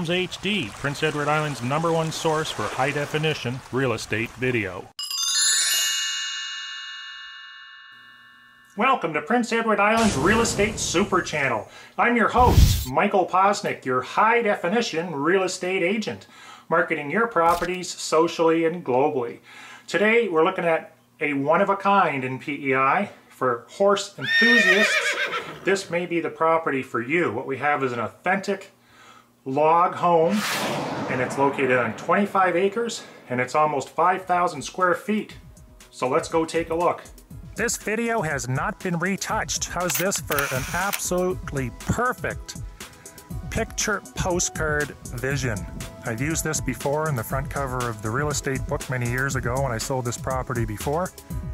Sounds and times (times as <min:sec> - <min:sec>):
Speech: 0:00.0 - 0:04.9, 0:08.8 - 0:24.9, 0:25.7 - 0:28.8, 0:29.4 - 0:30.4, 0:31.0 - 0:35.4, 0:36.0 - 0:42.6, 0:43.5 - 0:51.1.